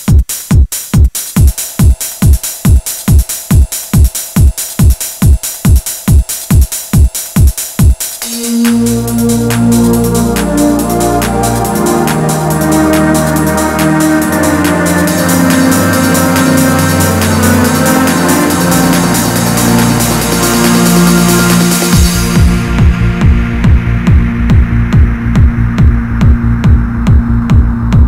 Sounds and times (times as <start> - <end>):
Electronic music: 0.0 - 28.0.